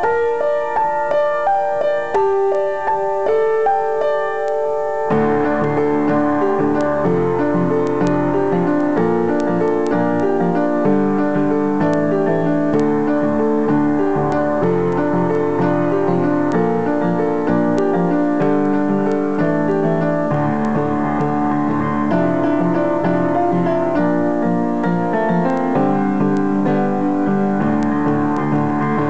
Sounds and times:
Music: 0.0s - 29.0s.

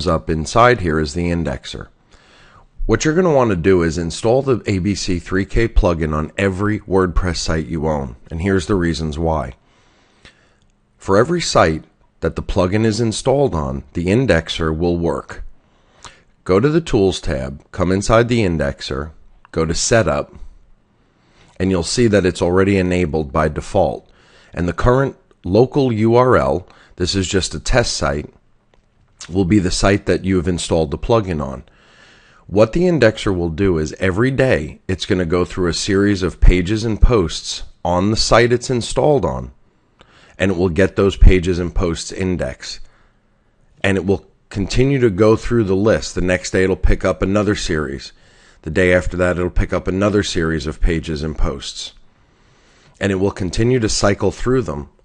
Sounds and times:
Speech: 0.0s - 2.0s, 2.8s - 9.6s, 11.0s - 15.5s, 16.4s - 20.6s, 21.6s - 28.4s, 29.2s - 31.7s, 32.5s - 39.6s, 40.4s - 42.9s, 43.8s - 52.0s, 53.0s - 55.0s.

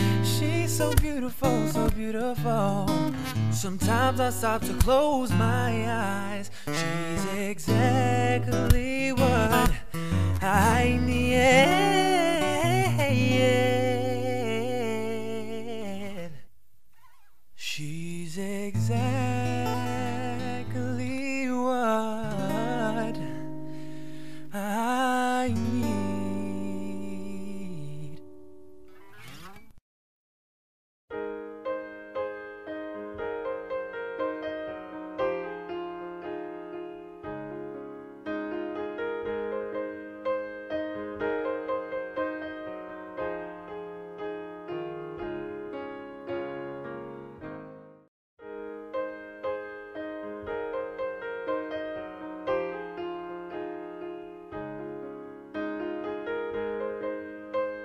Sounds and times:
Piano: 0.0s - 16.4s, 17.6s - 29.8s, 31.1s - 57.8s.

